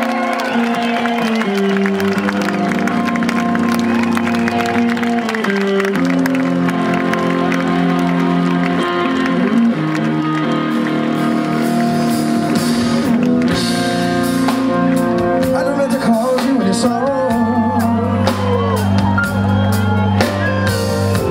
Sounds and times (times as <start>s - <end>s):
Music: 0.0s - 21.3s.